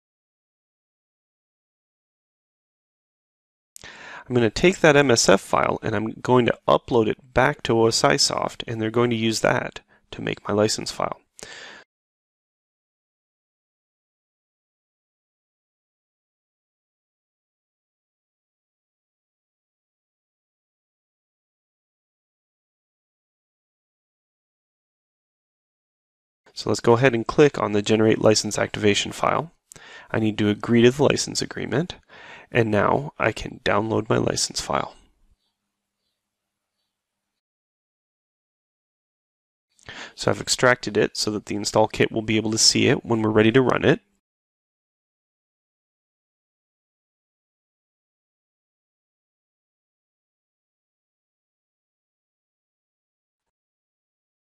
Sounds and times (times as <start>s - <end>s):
Inside, small room: 3.8s - 11.9s, 26.5s - 37.4s, 39.8s - 44.2s
Speech: 4.2s - 11.3s, 26.5s - 35.1s, 39.9s - 44.2s.